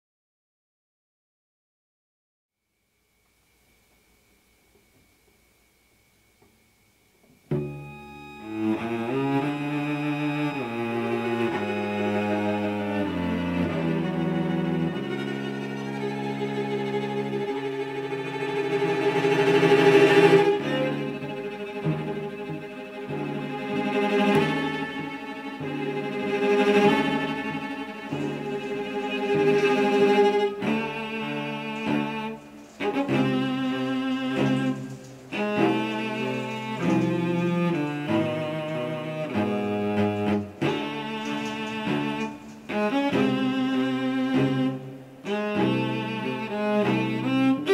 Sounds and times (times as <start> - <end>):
Cello: 7.2 - 47.7.